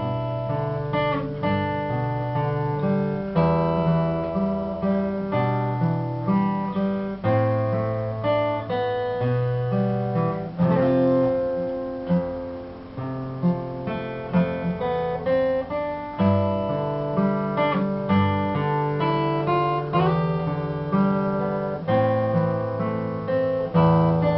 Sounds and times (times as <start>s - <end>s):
Acoustic guitar: 0.0s - 24.3s
Strum: 0.0s - 24.3s.